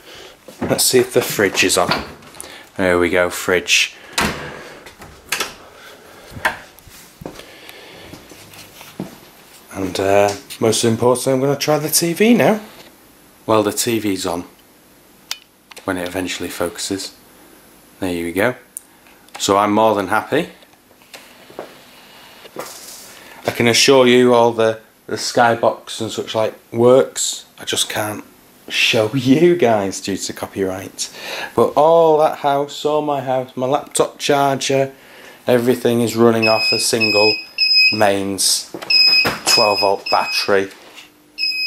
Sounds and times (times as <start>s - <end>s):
Speech: 0.6s - 2.1s, 2.8s - 4.0s, 9.7s - 12.8s, 13.5s - 14.6s, 15.8s - 17.2s, 18.0s - 18.7s, 19.4s - 20.6s, 23.4s - 38.8s, 39.5s - 40.8s.